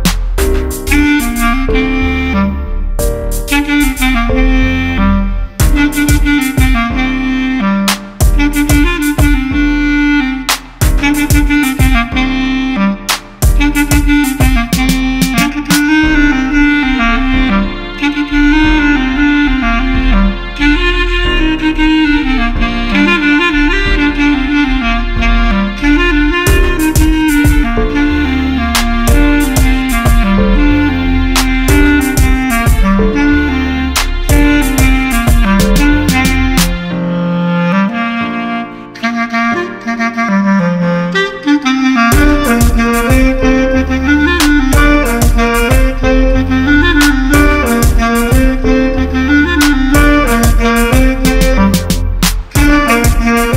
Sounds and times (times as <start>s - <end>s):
Saxophone: 0.0s - 53.5s.